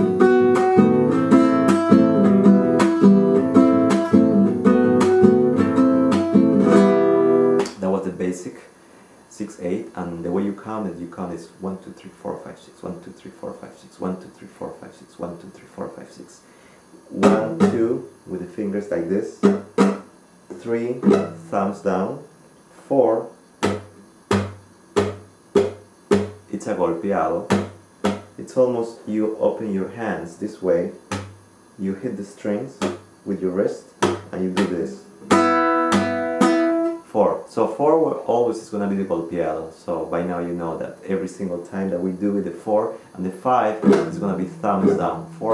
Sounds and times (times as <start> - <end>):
Acoustic guitar: 0.0 - 7.8, 16.9 - 18.1, 19.4 - 22.5, 23.6 - 26.5, 27.4 - 28.4, 34.0 - 37.1, 43.3 - 45.5
Strum: 0.0 - 7.8, 17.0 - 18.1, 19.3 - 22.4, 23.6 - 26.5, 27.4 - 28.4, 34.0 - 37.0, 43.5 - 45.5
Speech: 7.7 - 16.5, 17.1 - 19.5, 20.5 - 23.4, 26.5 - 27.6, 28.4 - 31.0, 31.8 - 35.1, 37.0 - 45.5.